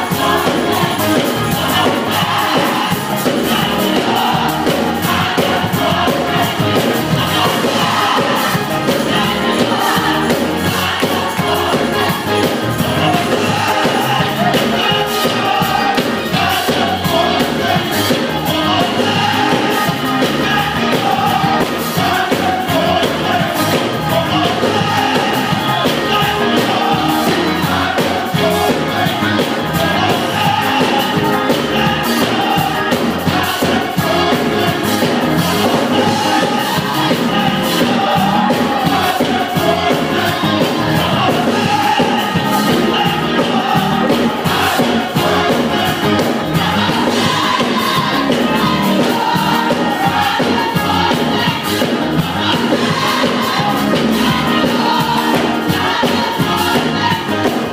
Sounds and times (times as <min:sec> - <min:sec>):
Choir: 0:00.0 - 0:57.7.